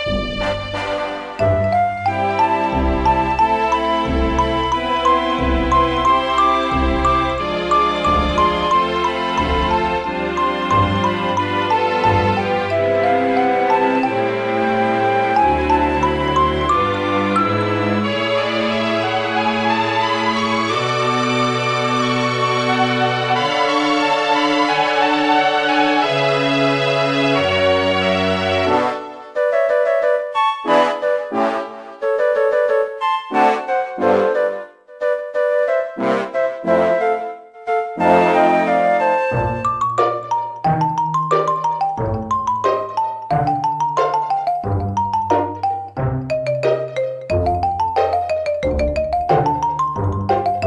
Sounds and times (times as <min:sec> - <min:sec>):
Music: 0:00.0 - 0:50.6.